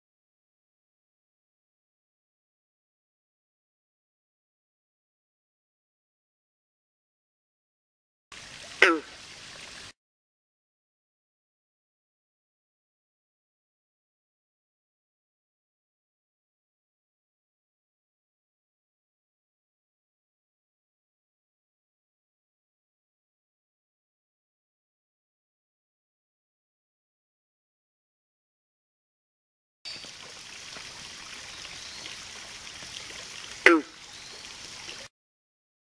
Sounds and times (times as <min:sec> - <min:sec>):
Frog: 0:08.7 - 0:09.2, 0:33.4 - 0:35.1.